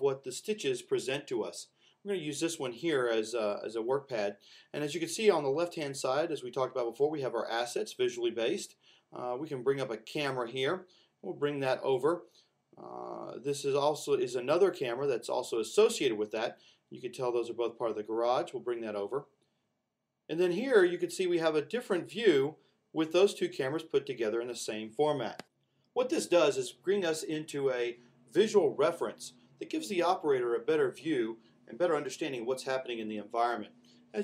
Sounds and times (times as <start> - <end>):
Speech: 0.0 - 19.3, 20.3 - 25.4, 26.0 - 34.2.